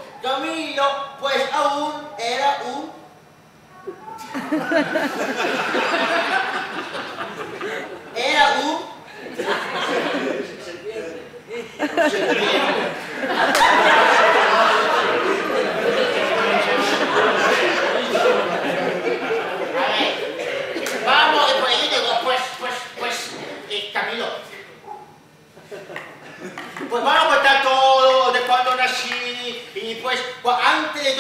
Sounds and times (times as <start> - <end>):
Speech: 0.0 - 3.0, 8.2 - 9.0, 19.6 - 24.7, 26.8 - 31.2.